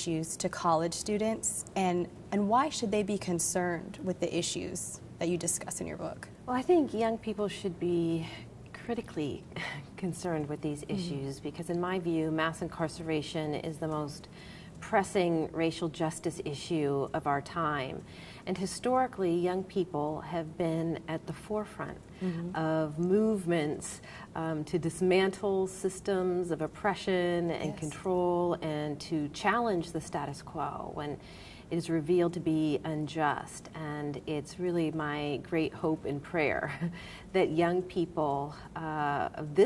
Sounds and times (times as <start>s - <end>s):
Speech: 0.0s - 39.6s.